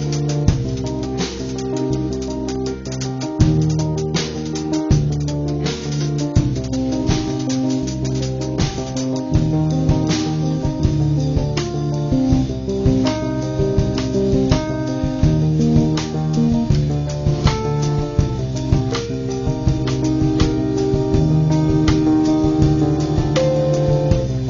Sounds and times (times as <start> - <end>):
Music: 0.0 - 24.5.